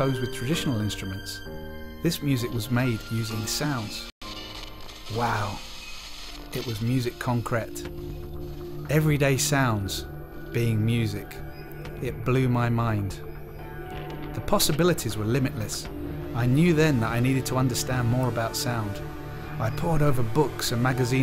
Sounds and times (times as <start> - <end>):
Speech: 0.0 - 1.4, 2.0 - 4.1, 5.1 - 5.6, 6.6 - 7.9, 8.9 - 11.4, 12.0 - 13.2, 14.4 - 19.0, 19.6 - 21.2
Music: 0.0 - 21.2.